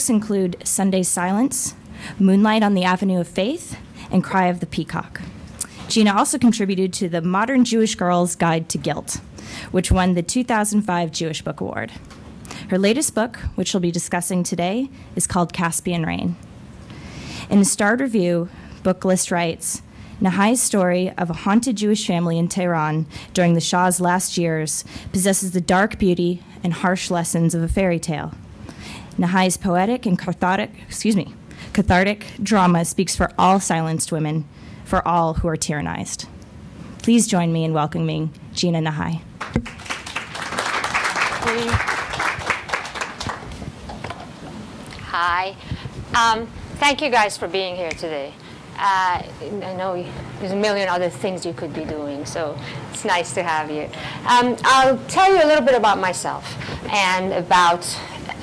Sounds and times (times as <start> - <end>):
Speech: 0.0 - 5.2, 5.9 - 9.2, 9.8 - 12.0, 12.7 - 16.4, 17.5 - 28.4, 29.2 - 36.3, 37.0 - 39.2, 45.0 - 45.6, 46.2 - 58.4.